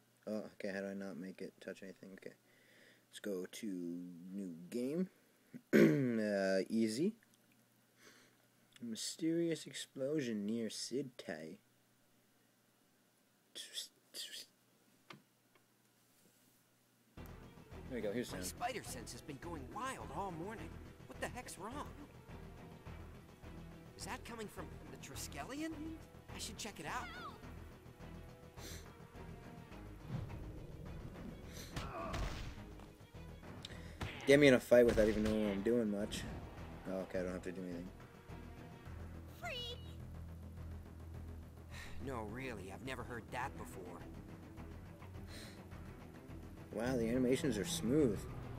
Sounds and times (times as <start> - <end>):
Music: 17.2 - 48.5.